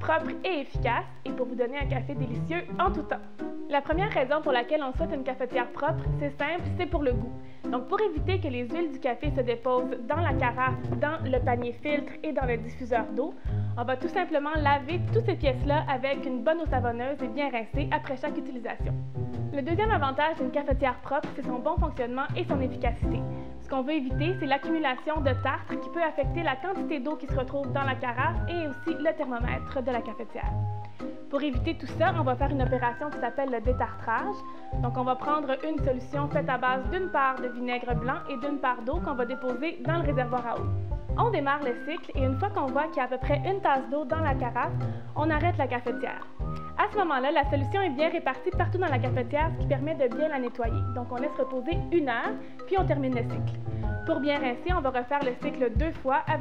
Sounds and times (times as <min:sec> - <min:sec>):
Speech: 0:00.0 - 0:18.9, 0:19.6 - 0:30.6, 0:31.3 - 0:53.4, 0:54.1 - 0:56.4
Music: 0:00.0 - 0:56.4.